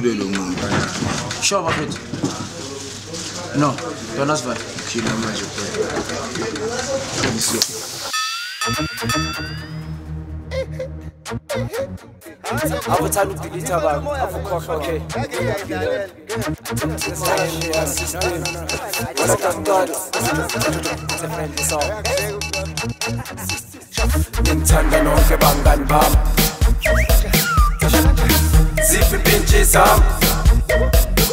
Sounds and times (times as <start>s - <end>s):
Music: 8.1s - 31.3s.